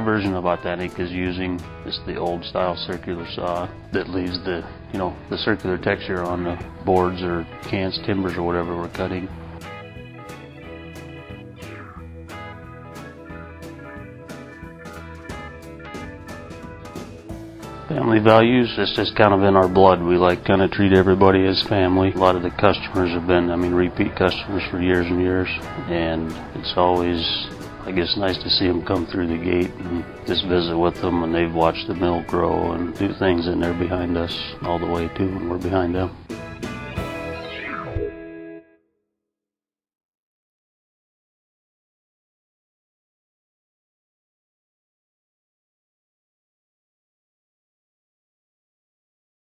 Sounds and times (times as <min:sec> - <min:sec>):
Speech: 0:00.0 - 0:09.3, 0:17.9 - 0:36.2
Music: 0:00.0 - 0:39.3.